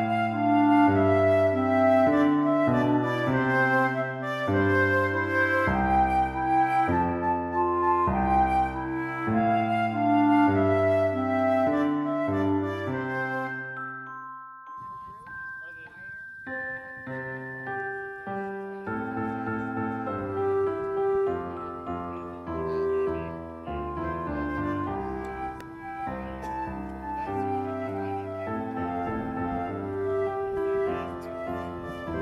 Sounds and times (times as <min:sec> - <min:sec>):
Music: 0:00.0 - 0:32.2
Speech: 0:14.8 - 0:16.9, 0:18.3 - 0:29.8.